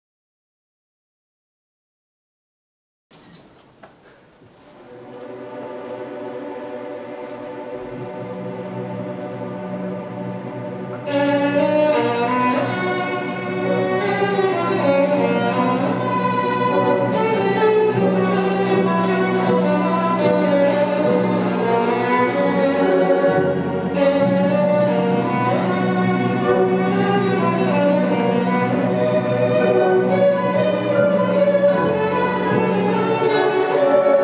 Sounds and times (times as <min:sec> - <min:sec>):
Violin, fiddle: 0:04.9 - 0:34.2.